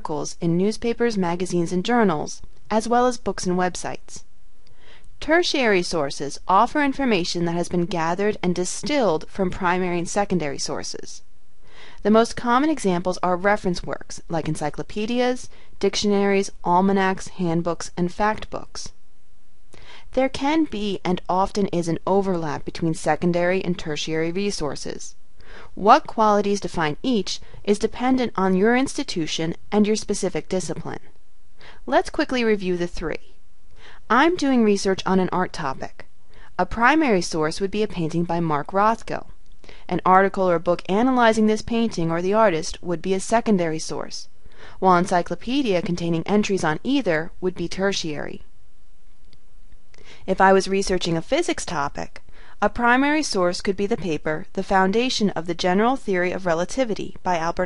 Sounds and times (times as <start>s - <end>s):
Speech: 0.0s - 4.2s, 5.2s - 11.2s, 12.0s - 18.9s, 20.1s - 31.1s, 31.8s - 33.3s, 34.1s - 39.3s, 39.9s - 48.4s, 50.2s - 57.6s.